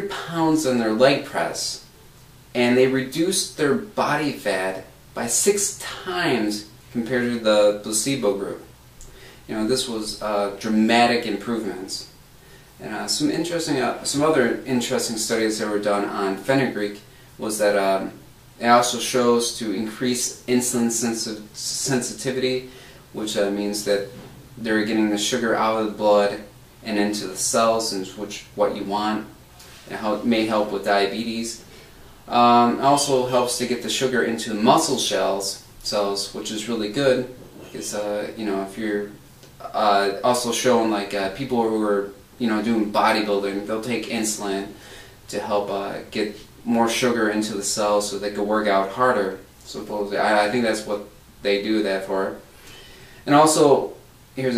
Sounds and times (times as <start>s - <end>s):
Speech: 0.0s - 1.9s, 2.5s - 8.7s, 9.5s - 12.2s, 12.8s - 52.5s, 53.2s - 54.5s
Inside, small room: 0.0s - 54.5s.